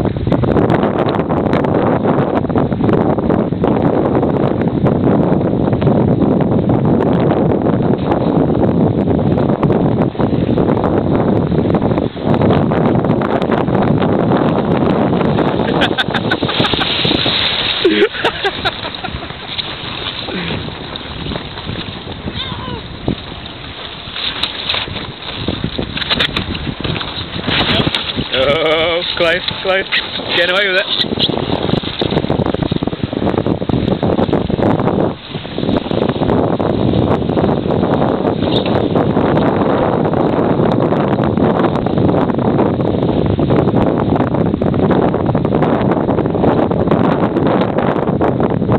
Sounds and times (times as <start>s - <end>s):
Speech: 27.7s - 31.0s.